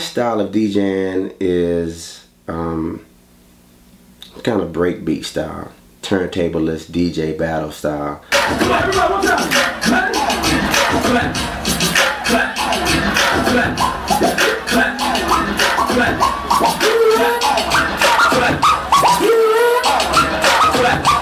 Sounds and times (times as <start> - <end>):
Beatboxing: 8.3 - 21.2.